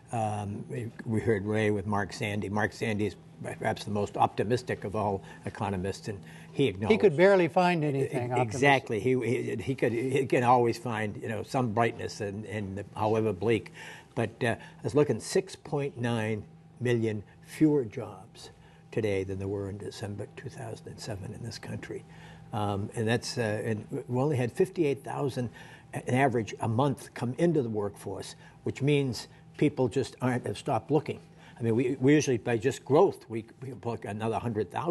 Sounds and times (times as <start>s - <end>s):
Narration, monologue: 0.0s - 34.9s
Male speech, man speaking: 0.1s - 34.9s.